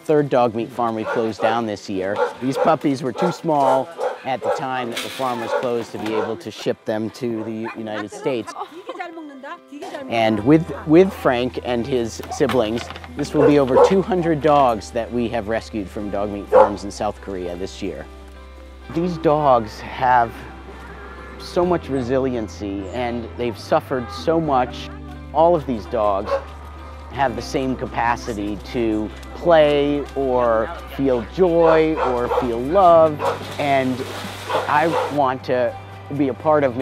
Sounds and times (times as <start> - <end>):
Music: 0.0 - 36.8
Bow-wow: 1.0 - 6.4, 13.3 - 14.3, 16.5 - 16.8, 26.2 - 26.5, 31.8 - 32.6, 33.2 - 33.5, 34.5 - 35.2.